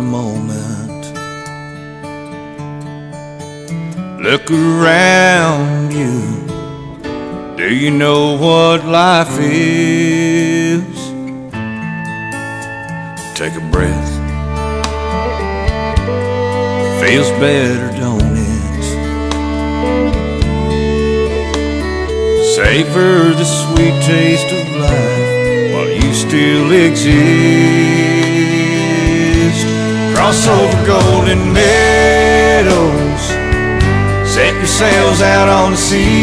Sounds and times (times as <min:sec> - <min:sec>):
Speech: 0:00.0 - 0:01.1, 0:13.4 - 0:14.2, 0:17.0 - 0:19.0
Country: 0:00.0 - 0:36.2.